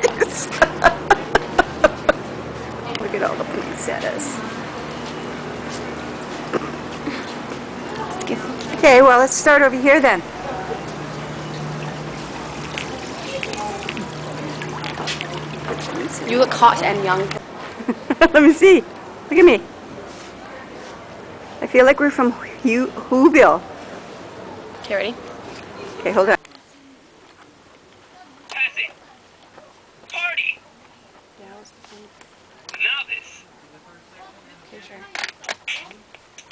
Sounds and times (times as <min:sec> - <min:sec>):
Water: 0:11.4 - 0:17.4.